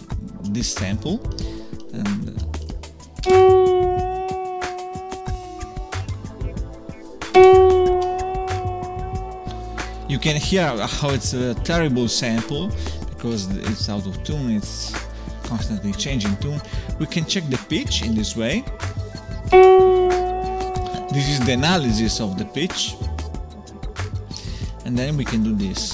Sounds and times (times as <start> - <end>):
Speech: 0.0 - 2.5, 10.1 - 18.7, 20.9 - 23.1, 24.8 - 25.9
Music: 0.0 - 25.9
Harmonic: 1.5 - 13.3, 19.5 - 24.4.